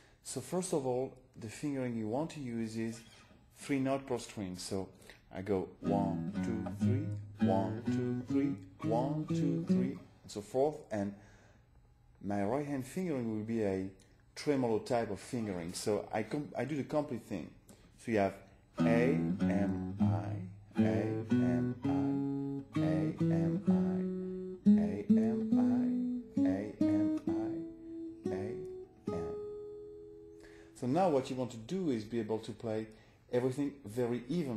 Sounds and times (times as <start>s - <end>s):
Strum: 5.8s - 10.0s, 18.8s - 30.6s
Acoustic guitar: 5.8s - 10.2s, 18.8s - 30.8s.